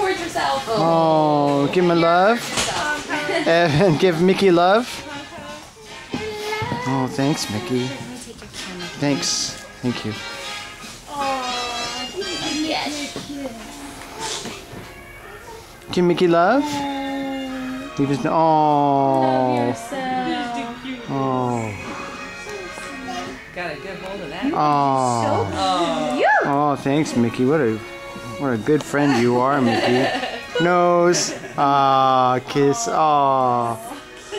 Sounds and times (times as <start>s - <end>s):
Music: 0.0s - 34.3s.